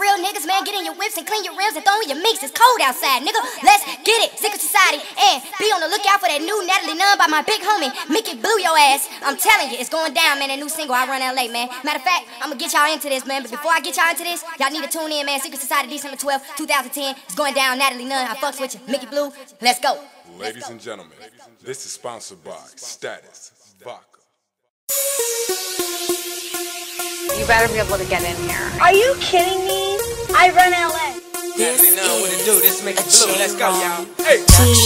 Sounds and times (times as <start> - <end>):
Speech: 0.0 - 24.1, 27.4 - 34.4.